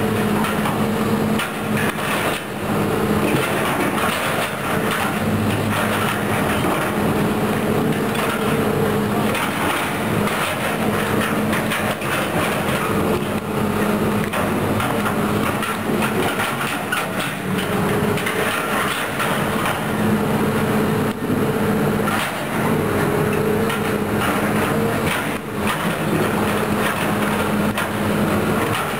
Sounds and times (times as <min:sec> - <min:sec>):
Outside, urban or manmade: 0:00.0 - 0:28.9
Vehicle: 0:00.0 - 0:28.9.